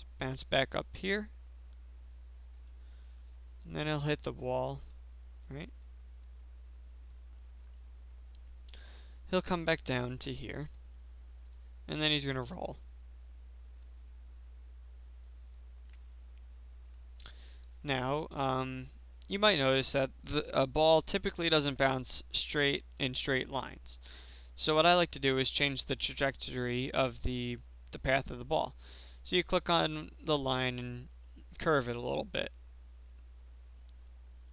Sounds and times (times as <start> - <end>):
Speech: 0.0 - 1.4, 3.7 - 4.9, 5.5 - 5.8, 9.3 - 10.8, 11.9 - 12.8, 17.8 - 24.0, 24.6 - 32.6
Clicking: 2.5 - 2.8, 5.8 - 6.4, 7.6 - 8.5, 15.5 - 17.3, 33.9 - 34.2.